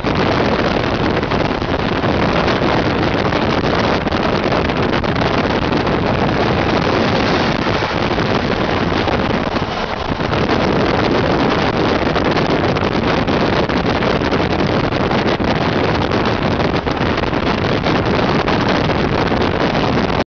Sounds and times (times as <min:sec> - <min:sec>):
Vehicle: 0:00.0 - 0:20.2.